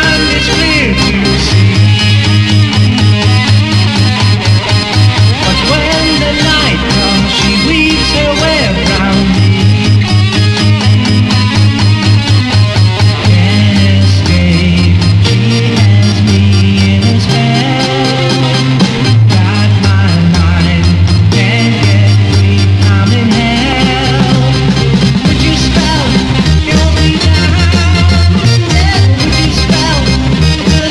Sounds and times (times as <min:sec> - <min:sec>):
Sampler: 0:00.0 - 0:30.9.